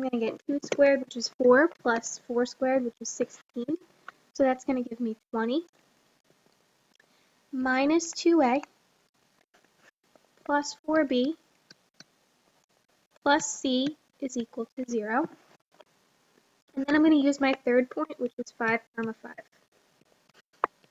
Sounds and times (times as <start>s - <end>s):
Speech: 0.0s - 3.8s, 4.4s - 5.7s, 7.6s - 8.7s, 10.5s - 11.4s, 13.3s - 15.4s, 16.8s - 19.5s.